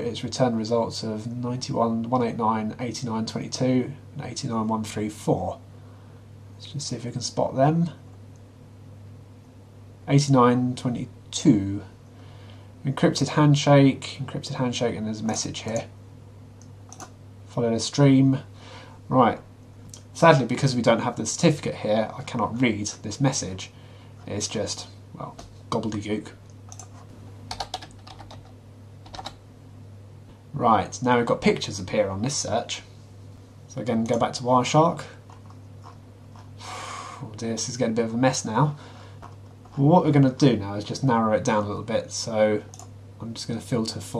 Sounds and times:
Speech: 0.0 - 5.7, 6.6 - 8.0, 10.0 - 12.0, 12.8 - 16.0, 17.5 - 18.5, 19.1 - 26.4, 30.5 - 33.0, 33.7 - 35.2, 37.2 - 38.8, 39.8 - 44.1
Computer keyboard: 16.9 - 17.1, 26.7 - 29.4.

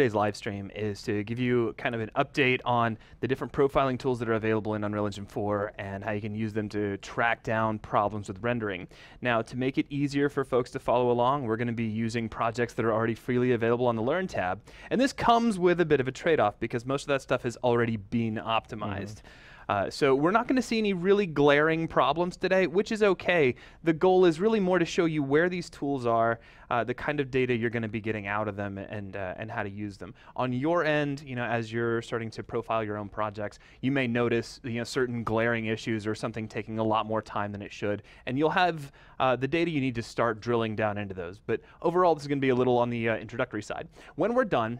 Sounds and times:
Speech: 0.0 - 44.7.

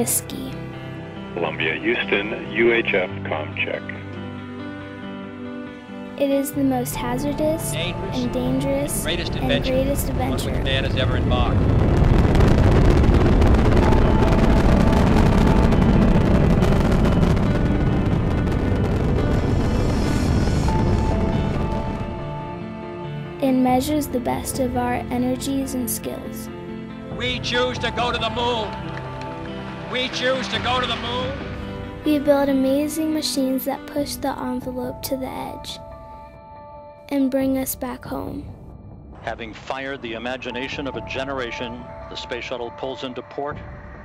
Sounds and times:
Speech: 0.0 - 0.6, 1.4 - 4.0, 6.2 - 11.6, 23.4 - 26.5, 30.0 - 31.4, 32.1 - 35.8, 37.1 - 38.4, 39.3 - 43.6
Music: 0.0 - 44.0.

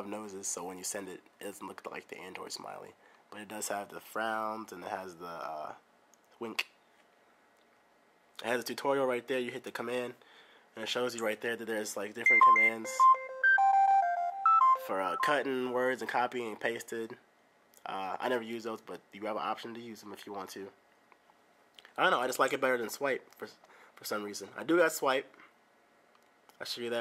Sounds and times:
Speech: 0.0 - 5.8, 6.4 - 6.7, 8.4 - 10.2, 10.8 - 13.0, 14.8 - 17.2, 17.8 - 20.8, 22.0 - 25.4, 26.6 - 27.0.

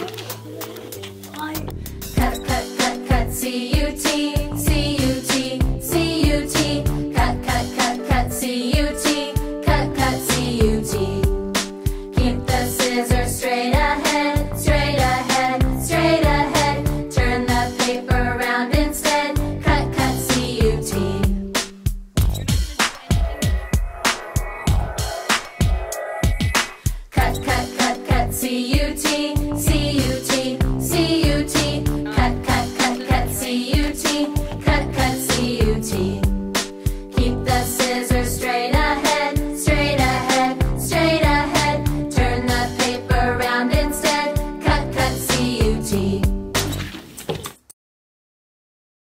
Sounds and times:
Music: 0.0 - 47.2.

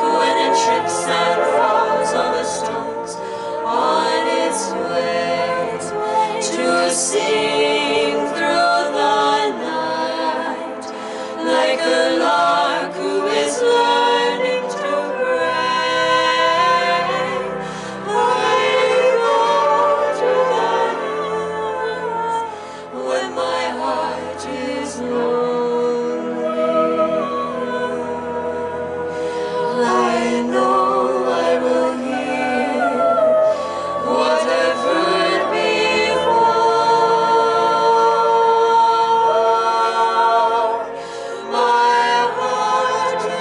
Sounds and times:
Humming: 0.0 - 43.4
Music: 0.0 - 43.4
Singing: 0.0 - 43.4.

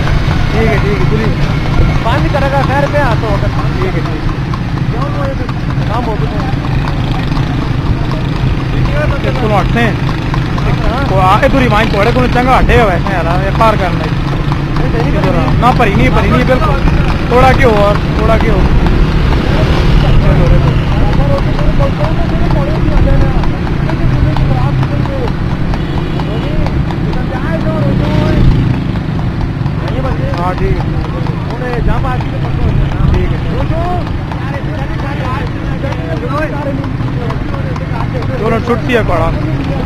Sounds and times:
Clip-clop: 0.0 - 39.8
Speech: 0.5 - 1.4, 2.0 - 4.2, 4.9 - 10.0, 10.6 - 14.2, 14.8 - 18.8, 19.5 - 25.3, 26.3 - 28.6, 29.8 - 39.8.

